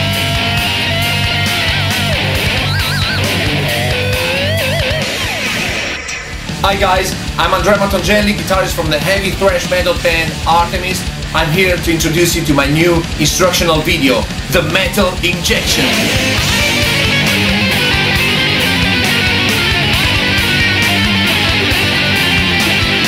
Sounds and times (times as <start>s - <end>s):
Electric guitar: 0.0s - 12.0s, 13.0s - 23.0s
Speech: 6.6s - 16.2s.